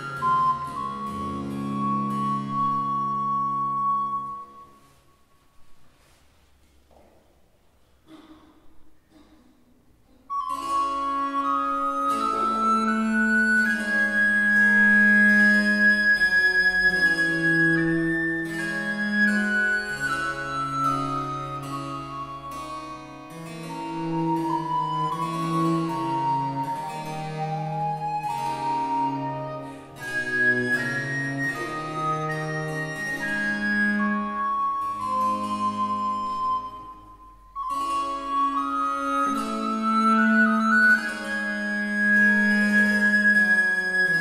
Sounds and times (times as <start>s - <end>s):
Cello: 0.0s - 7.1s, 10.1s - 44.2s.